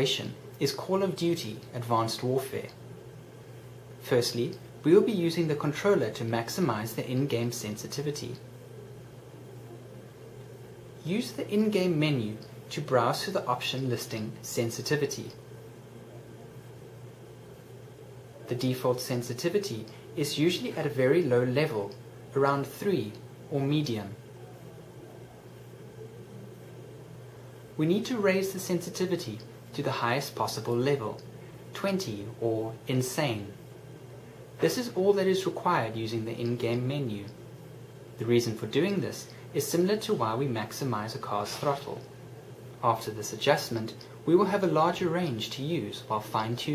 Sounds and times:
Speech: 0.0 - 2.8, 4.0 - 8.5, 11.0 - 15.4, 18.4 - 25.4, 27.8 - 33.7, 34.6 - 37.4, 38.2 - 42.1, 42.8 - 46.7.

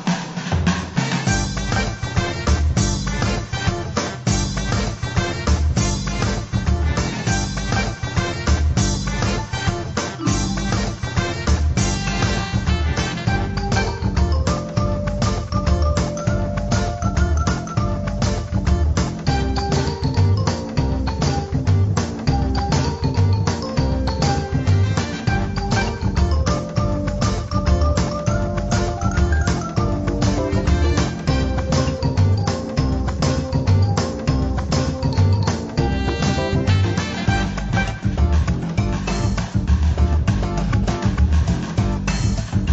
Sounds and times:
Music: 0.0 - 42.7.

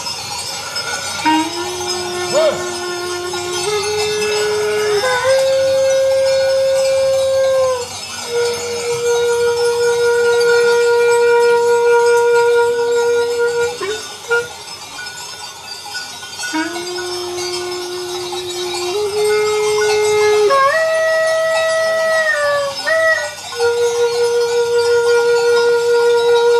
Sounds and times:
Music: 0.0 - 26.5
Outside, rural or natural: 0.0 - 26.5.

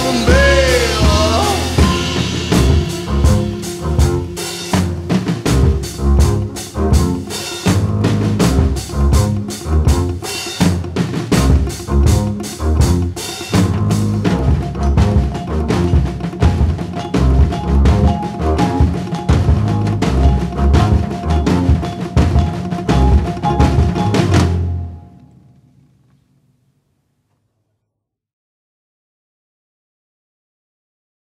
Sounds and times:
Timpani: 0.0 - 25.2.

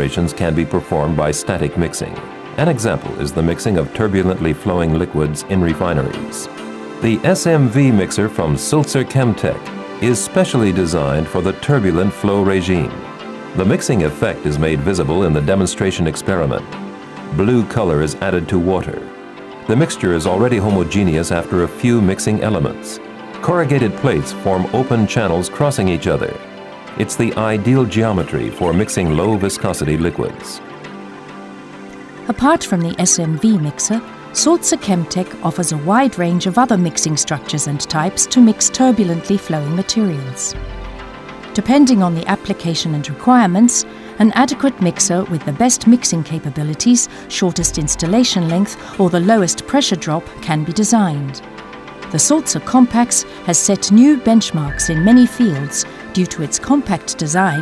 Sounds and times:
Speech: 0.0 - 13.0, 13.6 - 16.7, 17.3 - 19.1, 19.7 - 26.4, 27.0 - 30.6, 32.3 - 40.6, 41.6 - 51.4, 52.2 - 57.6
Music: 0.0 - 57.6.

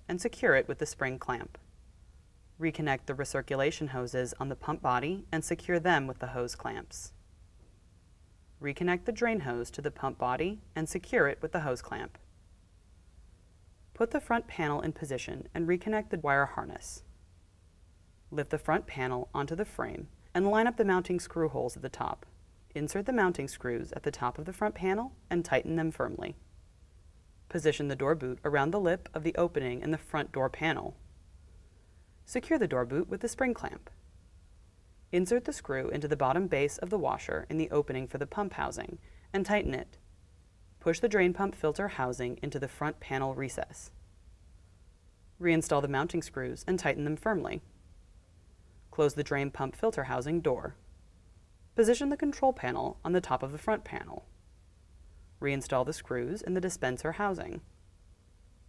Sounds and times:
Speech: 0.1 - 1.6, 2.6 - 7.2, 8.6 - 12.2, 14.0 - 17.1, 18.4 - 26.4, 27.5 - 31.0, 32.3 - 33.9, 35.2 - 40.0, 40.8 - 44.0, 45.4 - 47.7, 48.9 - 50.8, 51.8 - 54.3, 55.4 - 57.6.

